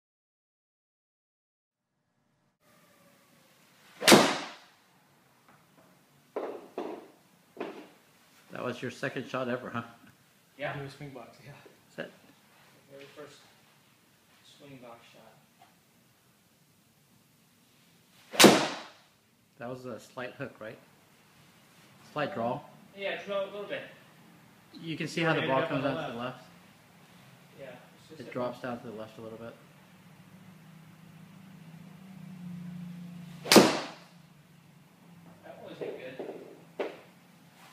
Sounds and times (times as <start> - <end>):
Arrow: 4.0 - 4.7, 18.3 - 19.1, 33.4 - 34.1.